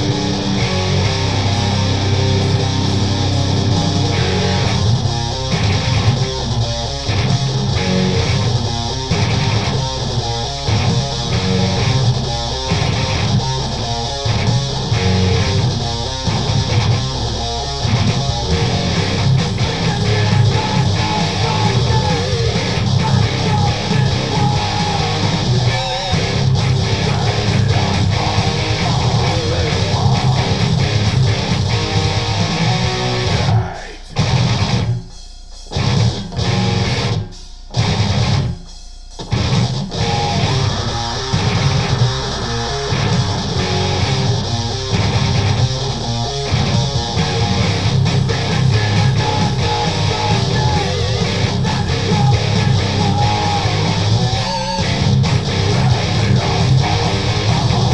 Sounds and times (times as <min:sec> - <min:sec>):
Strum: 0:00.0 - 0:57.9.